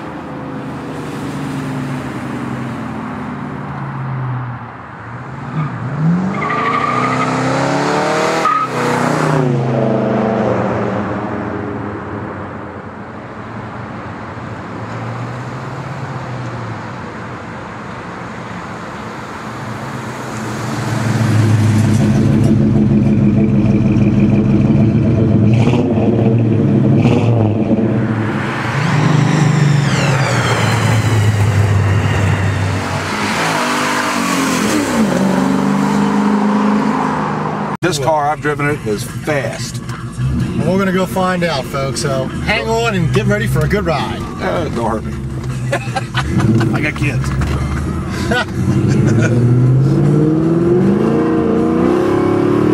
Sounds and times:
Car passing by: 0.6 - 3.0.

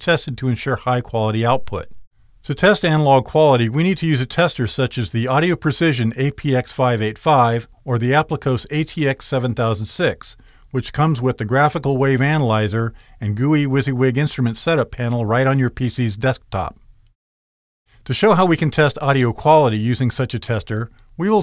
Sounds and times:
Speech: 0.0 - 16.8, 18.1 - 21.4.

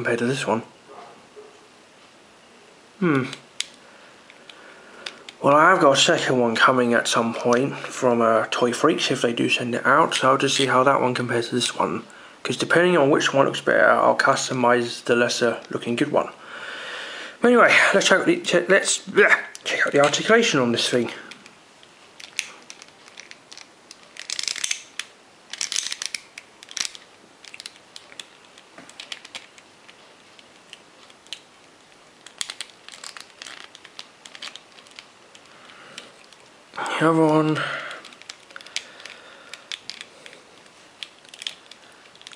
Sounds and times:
Speech: 0.0 - 0.7, 5.4 - 16.4, 17.4 - 21.3, 36.8 - 37.8
Inside, small room: 0.0 - 42.3.

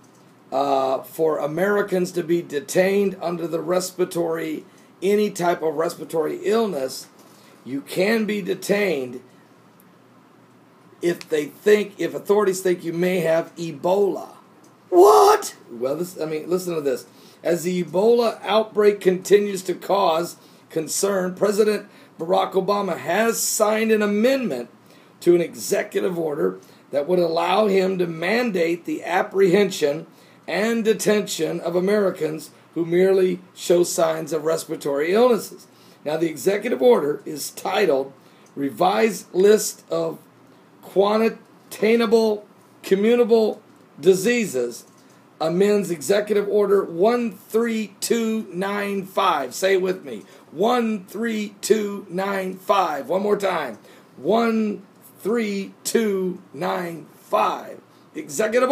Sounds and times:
Speech: 0.5 - 9.3, 11.0 - 58.7.

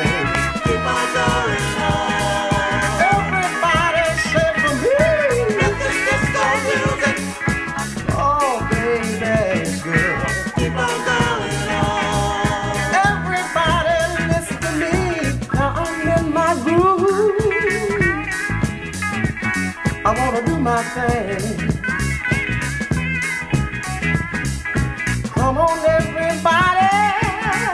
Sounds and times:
Pop music: 0.0 - 27.7
Ska: 0.0 - 27.7.

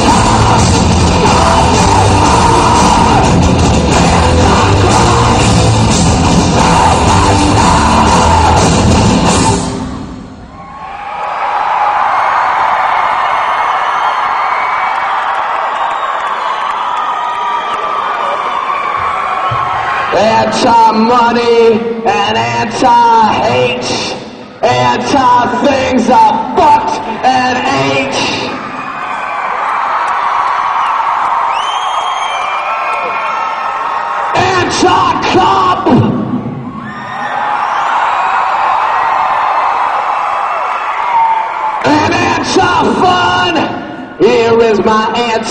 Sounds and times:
Inside, large room or hall: 0.0 - 45.5
Speech: 20.2 - 28.5, 41.9 - 45.5.

